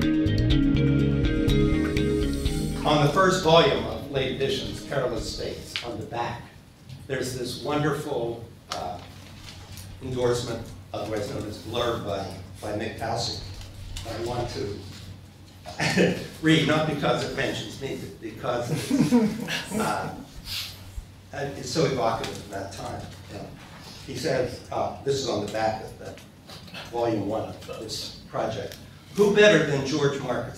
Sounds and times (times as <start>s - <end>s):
Speech: 2.8s - 9.1s, 10.0s - 15.0s, 15.7s - 18.9s, 19.7s - 20.3s, 21.3s - 26.2s, 26.8s - 30.5s.